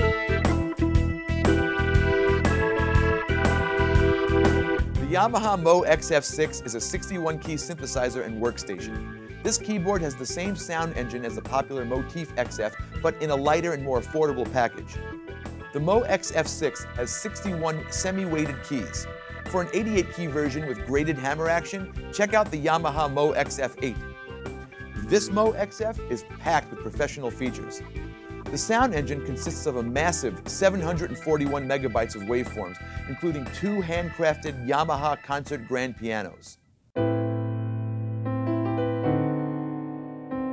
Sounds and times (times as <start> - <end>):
Speech: 5.0 - 15.0, 15.8 - 24.0, 25.0 - 27.9, 28.5 - 36.6.